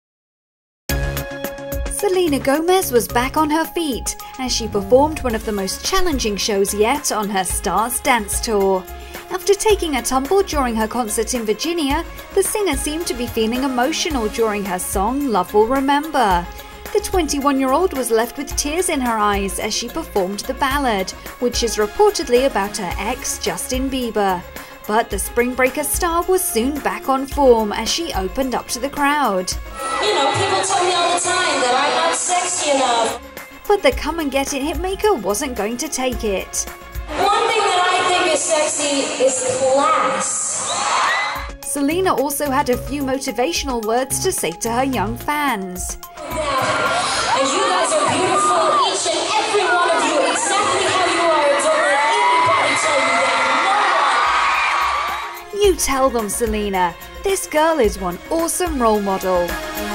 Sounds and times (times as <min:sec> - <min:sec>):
Music: 0:00.9 - 0:59.9
Speech: 0:01.9 - 0:40.2, 0:41.7 - 0:46.0, 0:55.6 - 0:59.5.